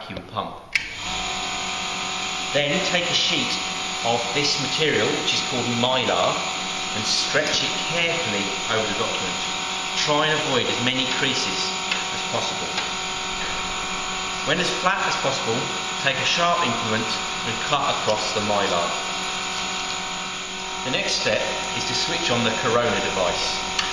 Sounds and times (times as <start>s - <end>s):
Speech: 0.0s - 0.6s, 2.6s - 9.4s, 10.0s - 12.9s, 14.5s - 19.0s, 20.8s - 23.6s.